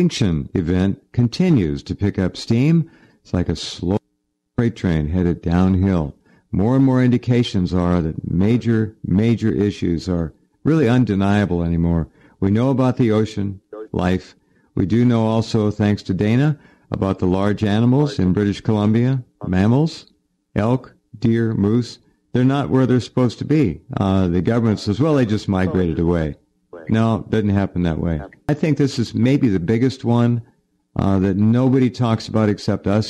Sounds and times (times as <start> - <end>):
Speech: 0.0 - 4.0, 4.6 - 33.0.